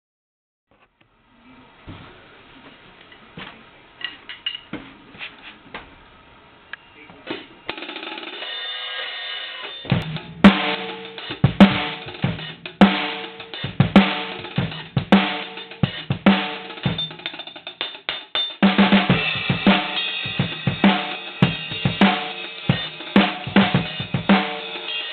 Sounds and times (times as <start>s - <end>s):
Drum: 7.3s - 8.6s, 9.7s - 25.1s
Drum kit: 7.3s - 25.1s.